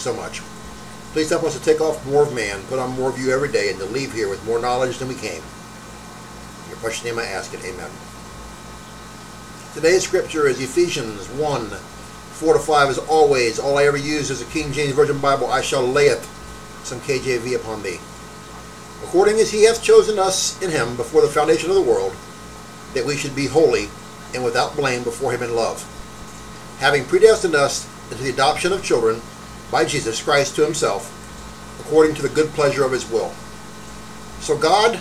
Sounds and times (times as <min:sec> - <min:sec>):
Speech: 0:00.0 - 0:00.5, 0:01.2 - 0:05.5, 0:06.7 - 0:08.0, 0:09.8 - 0:18.1, 0:19.0 - 0:22.2, 0:22.9 - 0:26.0, 0:26.8 - 0:31.2, 0:31.8 - 0:33.4, 0:34.4 - 0:35.0.